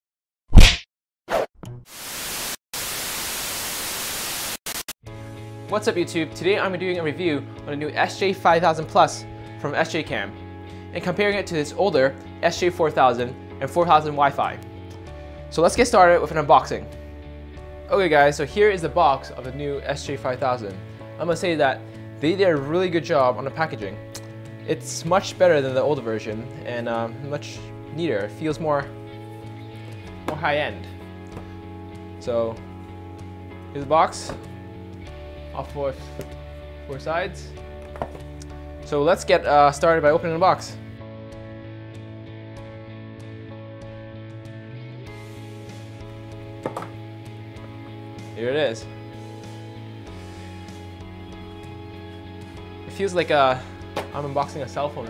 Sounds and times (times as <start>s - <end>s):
Music: 5.0s - 55.0s
Speech: 5.7s - 10.3s, 10.9s - 14.6s, 15.5s - 16.9s, 17.9s - 24.0s, 24.7s - 28.9s, 30.3s - 30.9s, 32.2s - 32.6s, 33.7s - 34.4s, 35.5s - 36.1s, 36.9s - 37.5s, 38.9s - 40.8s, 48.4s - 48.9s, 52.9s - 55.0s.